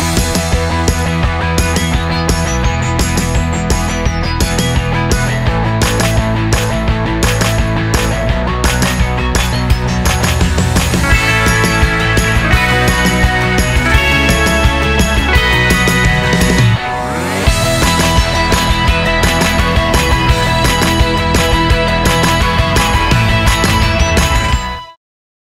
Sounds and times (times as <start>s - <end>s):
Music: 0.0s - 25.0s.